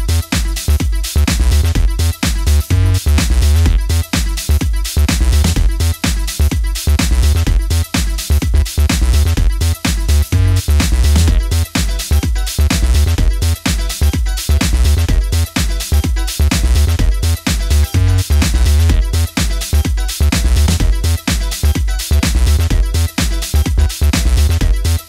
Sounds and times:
Disco: 0:00.0 - 0:25.0.

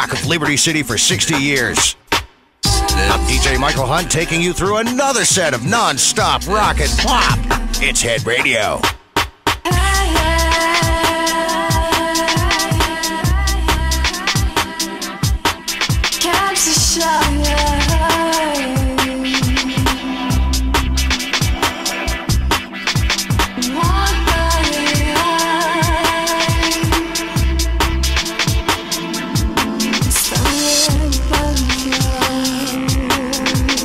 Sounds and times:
Music: 0:00.0 - 0:33.8.

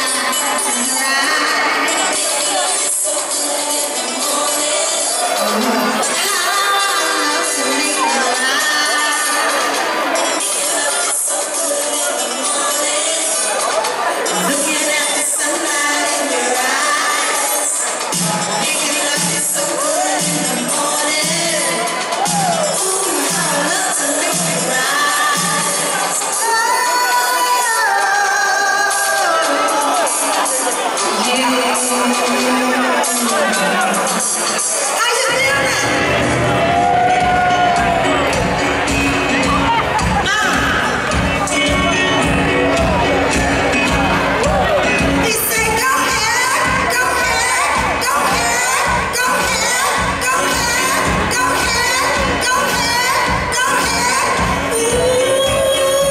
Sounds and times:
Speech: 0:00.0 - 0:36.3, 0:39.3 - 0:56.1
Music: 0:00.0 - 0:56.1.

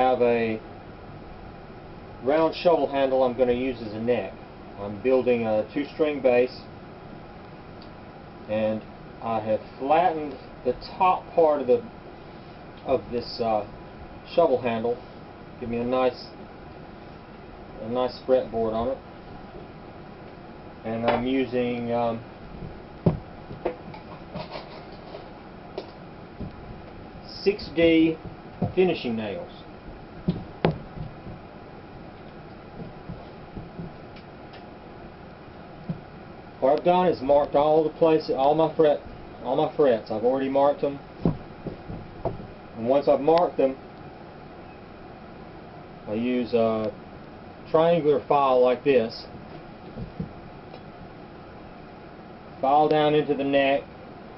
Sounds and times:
Speech: 0:00.0 - 0:00.6, 0:02.2 - 0:06.7, 0:08.5 - 0:11.9, 0:12.8 - 0:13.7, 0:14.3 - 0:15.0, 0:15.6 - 0:16.4, 0:17.8 - 0:19.0, 0:20.8 - 0:22.2, 0:27.3 - 0:29.7, 0:36.6 - 0:41.0, 0:42.8 - 0:43.8, 0:46.1 - 0:47.0, 0:47.7 - 0:49.3, 0:52.6 - 0:53.9.

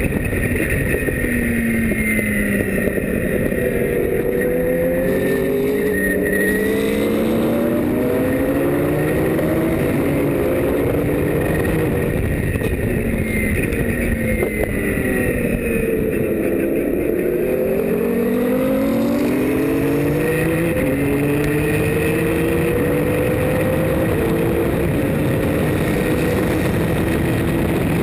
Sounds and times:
Car: 0:00.0 - 0:28.0.

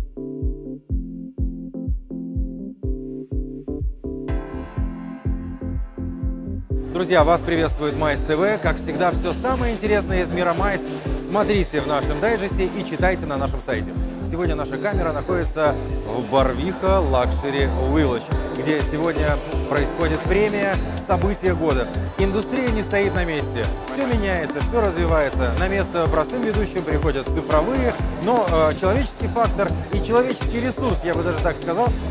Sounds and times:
Music: 0:00.0 - 0:32.1
Speech: 0:06.9 - 0:32.1.

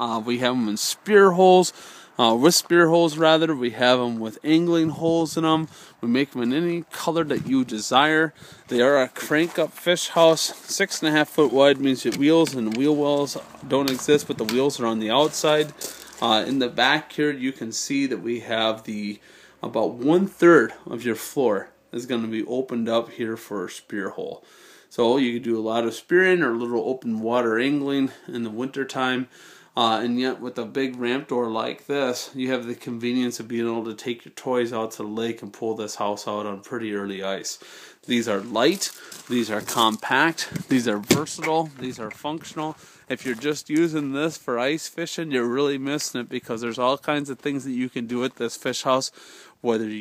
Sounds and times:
Speech: 0:00.0 - 0:50.0.

